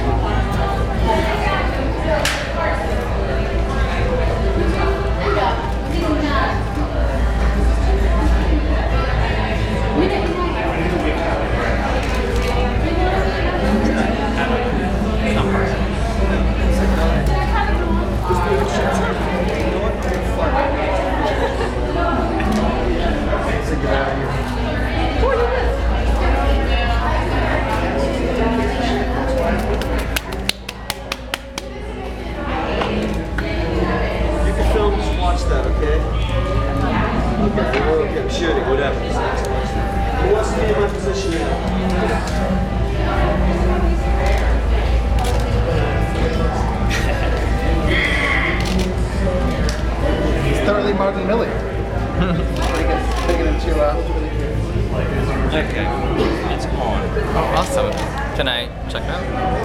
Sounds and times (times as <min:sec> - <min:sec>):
Inside, public space: 0:00.0 - 0:59.6
Music: 0:00.0 - 0:59.6
Speech: 0:00.0 - 0:59.6.